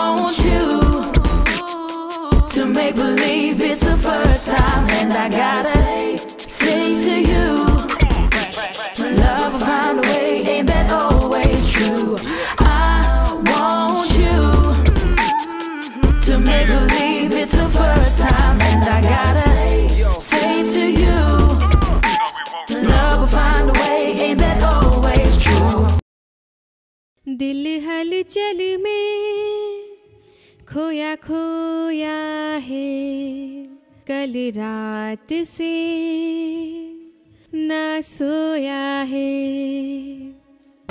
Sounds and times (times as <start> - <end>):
Music: 0.0 - 26.0.